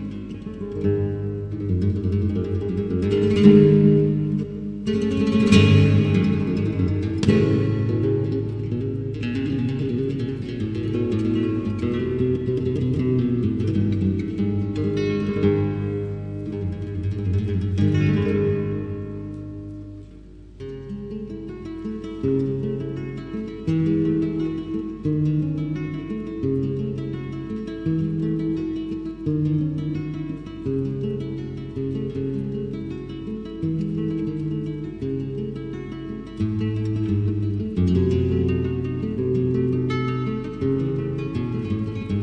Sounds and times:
Flamenco: 0:00.0 - 0:42.2
Guitar: 0:00.0 - 0:42.2.

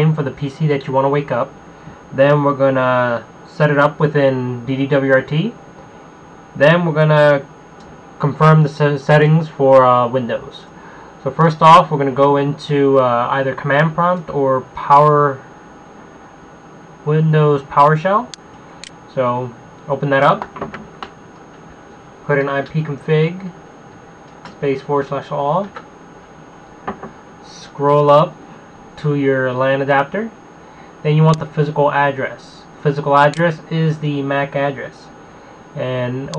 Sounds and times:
Speech: 0:00.0 - 0:01.5, 0:02.2 - 0:05.6, 0:06.6 - 0:07.5, 0:08.2 - 0:15.5, 0:17.1 - 0:18.4, 0:19.1 - 0:20.5, 0:22.2 - 0:23.6, 0:24.6 - 0:25.8, 0:27.4 - 0:28.4, 0:29.0 - 0:30.4, 0:31.0 - 0:35.2, 0:35.8 - 0:36.3.

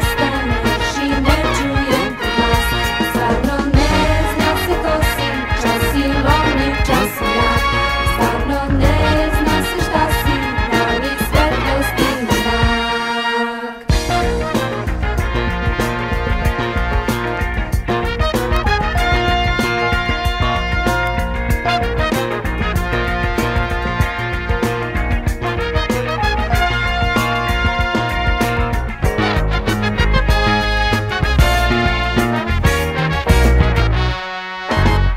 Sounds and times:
Swing music: 0:00.0 - 0:35.1.

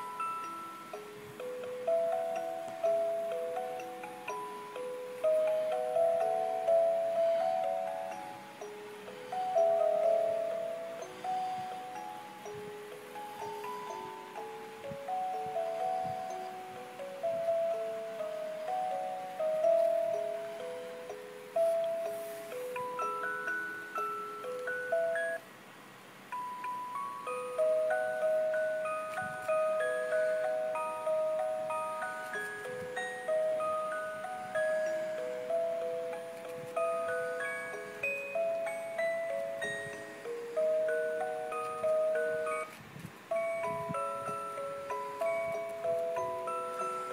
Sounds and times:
Music: 0:00.0 - 0:25.5, 0:26.2 - 0:47.1.

